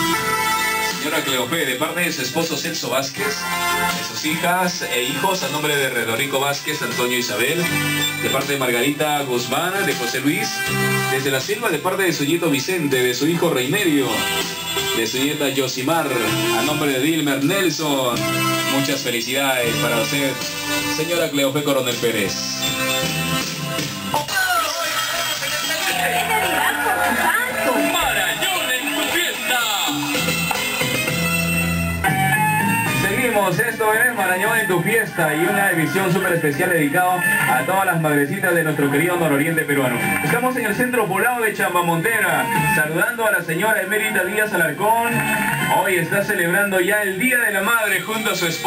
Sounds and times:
Music: 0:00.0 - 0:48.6
Speech: 0:00.9 - 0:14.2, 0:15.0 - 0:22.6, 0:24.3 - 0:30.0, 0:33.0 - 0:48.6.

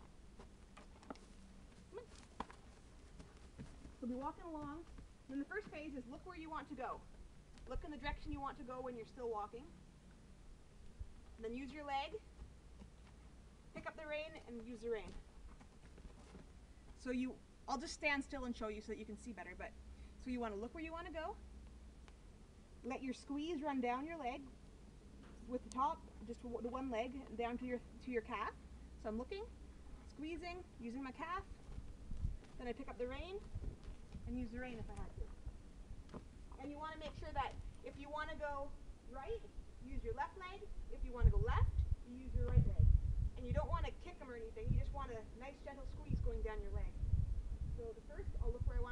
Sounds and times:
Speech: 0:04.0 - 0:07.0, 0:07.6 - 0:09.8, 0:11.4 - 0:12.2, 0:13.8 - 0:15.2, 0:17.0 - 0:21.4, 0:22.8 - 0:24.5, 0:25.4 - 0:31.5, 0:32.6 - 0:33.4, 0:34.3 - 0:35.3, 0:36.6 - 0:47.0, 0:47.8 - 0:48.9.

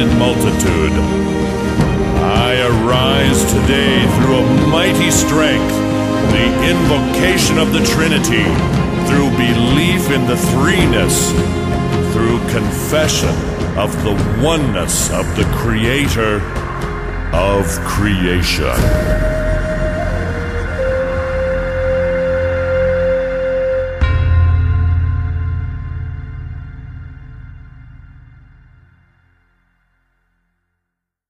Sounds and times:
Speech: 0:00.0 - 0:01.1, 0:02.2 - 0:16.5, 0:17.4 - 0:19.1
Music: 0:00.0 - 0:31.0.

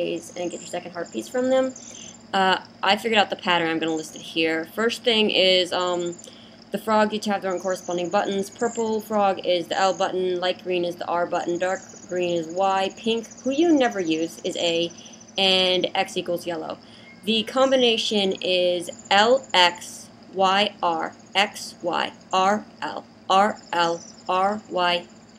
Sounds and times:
Speech: 0:00.0 - 0:25.0.

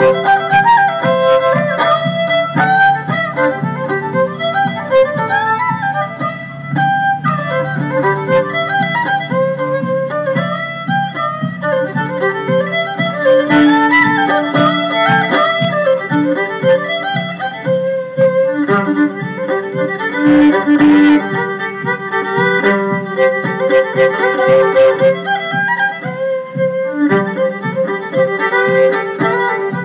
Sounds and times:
Violin, fiddle: 0:00.0 - 0:29.8.

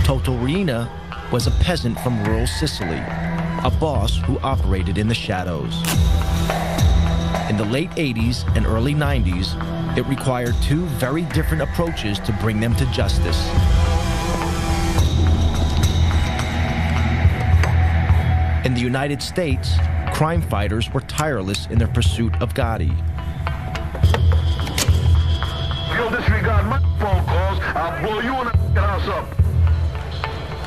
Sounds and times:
Speech: 0:00.0 - 0:05.9, 0:07.5 - 0:13.5, 0:18.6 - 0:23.0, 0:25.9 - 0:29.4
Music: 0:00.0 - 0:30.6.

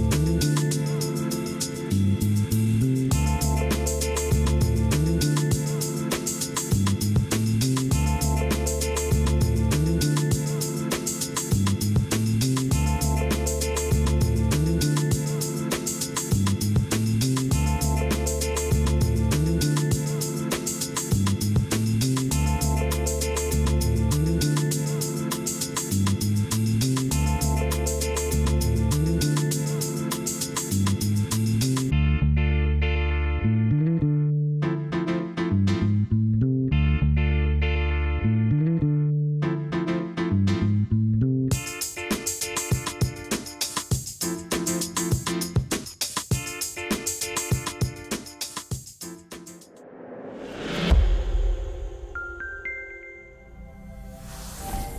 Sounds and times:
Music: 0:00.0 - 0:54.9.

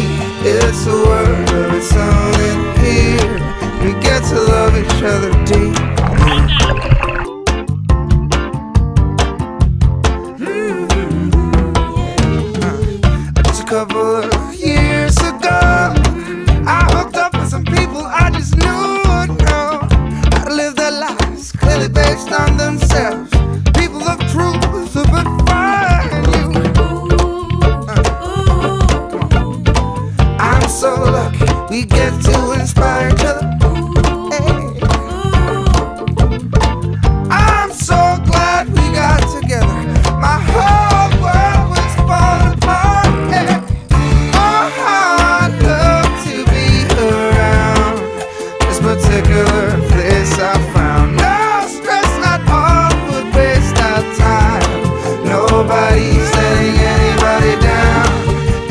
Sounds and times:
Music: 0:00.0 - 0:58.7
Speech: 0:06.2 - 0:06.9.

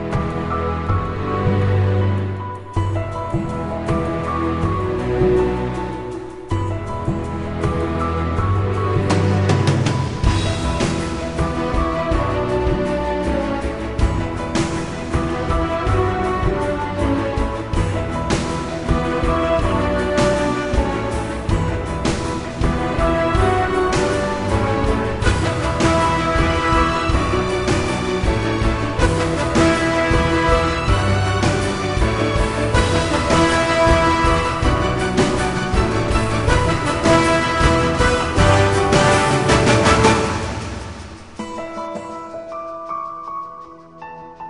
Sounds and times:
Music: 0:00.0 - 0:44.4.

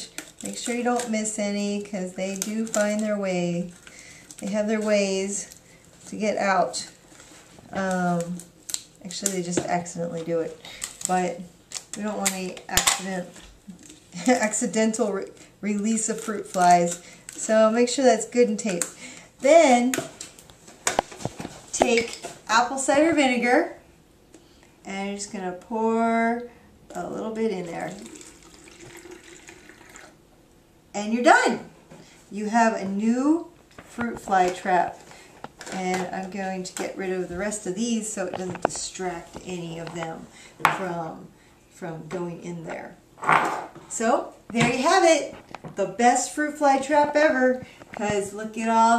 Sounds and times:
Speech: 0:00.4 - 0:03.7, 0:04.4 - 0:05.5, 0:06.1 - 0:07.0, 0:07.7 - 0:13.4, 0:14.2 - 0:20.0, 0:21.8 - 0:23.8, 0:24.9 - 0:28.1, 0:31.0 - 0:31.7, 0:32.3 - 0:35.0, 0:35.7 - 0:43.0, 0:43.9 - 0:48.9
Water tap, faucet: 0:27.9 - 0:30.2.

